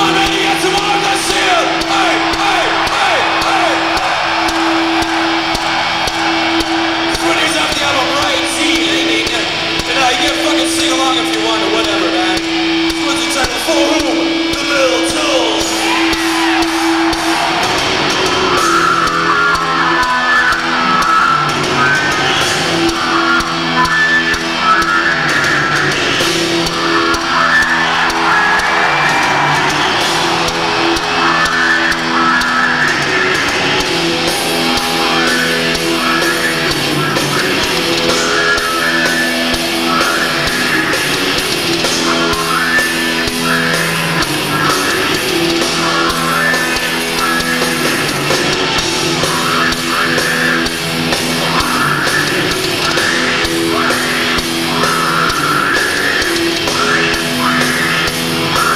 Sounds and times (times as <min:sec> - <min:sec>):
Music: 0:00.0 - 0:58.7.